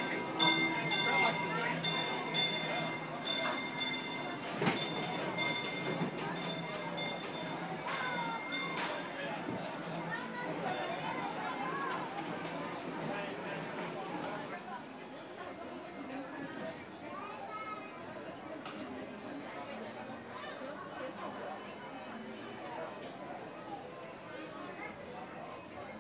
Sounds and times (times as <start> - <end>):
Speech: 0.0 - 26.0.